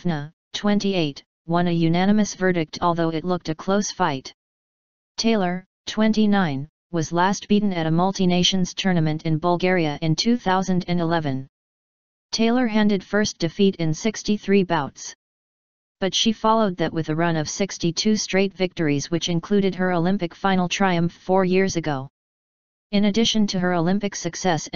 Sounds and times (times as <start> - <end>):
Speech: 0.0 - 4.4, 5.2 - 11.5, 12.3 - 15.2, 16.0 - 22.1, 22.9 - 24.7.